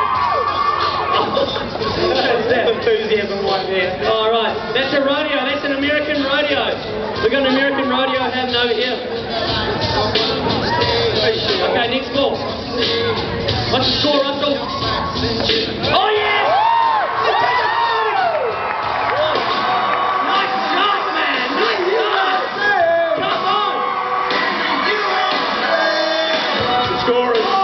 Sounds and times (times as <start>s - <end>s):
Music: 0.0s - 27.6s.